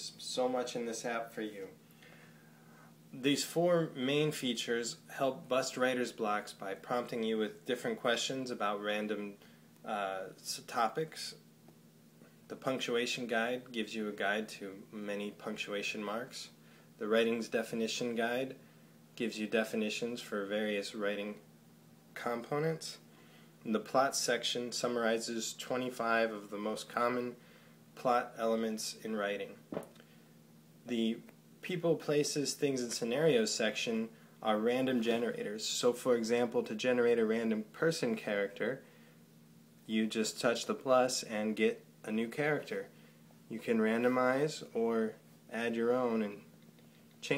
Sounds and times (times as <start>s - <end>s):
Speech: 0.0s - 1.8s, 3.1s - 11.4s, 12.5s - 18.6s, 19.2s - 21.5s, 22.2s - 27.4s, 28.0s - 29.7s, 30.8s - 38.9s, 39.9s - 46.5s.